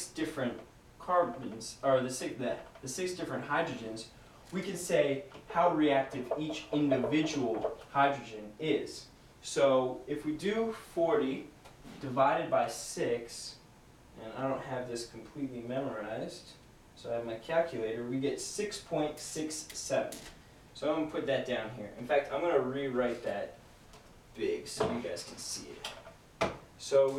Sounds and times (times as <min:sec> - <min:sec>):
Speech: 0:00.0 - 0:13.6, 0:14.2 - 0:23.6, 0:24.4 - 0:26.0, 0:26.8 - 0:27.1
Inside, small room: 0:00.0 - 0:27.1.